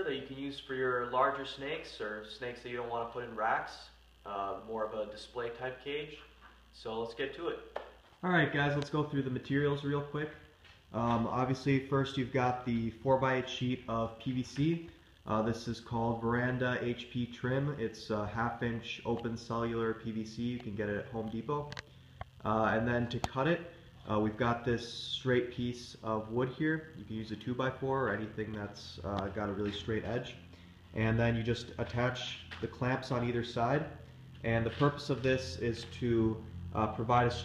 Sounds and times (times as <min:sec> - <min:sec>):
Speech: 0:00.0 - 0:21.8, 0:22.4 - 0:30.4, 0:31.0 - 0:37.4
Inside, small room: 0:00.0 - 0:37.4.